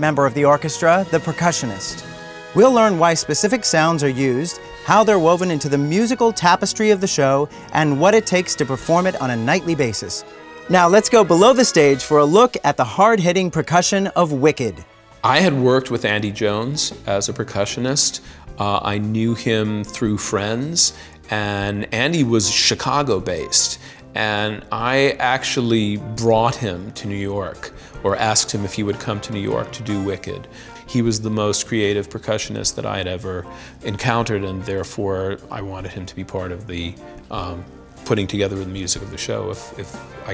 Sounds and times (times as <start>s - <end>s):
Speech: 0.0s - 2.0s, 2.6s - 40.3s
Music: 0.0s - 40.3s.